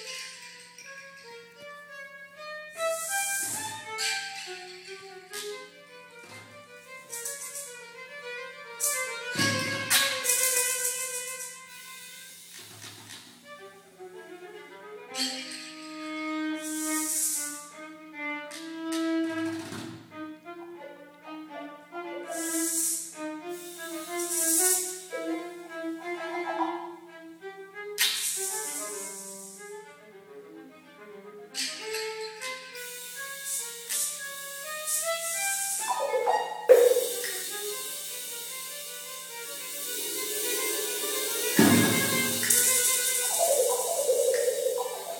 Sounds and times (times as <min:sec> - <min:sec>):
Percussion: 0:07.0 - 0:07.8, 0:08.8 - 0:11.6, 0:34.9 - 0:45.1.